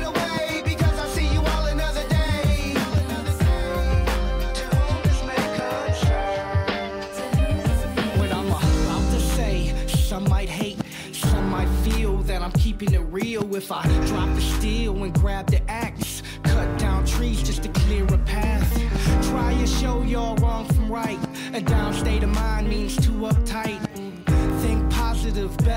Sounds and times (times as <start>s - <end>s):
Exciting music: 0.0s - 12.9s.